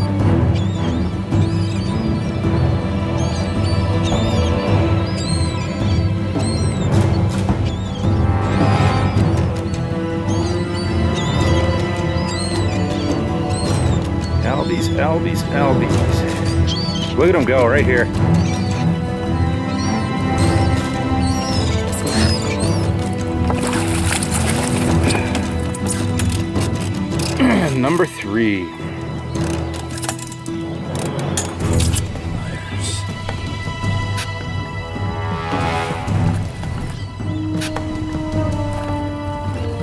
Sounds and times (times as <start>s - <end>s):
Music: 0.0s - 39.8s.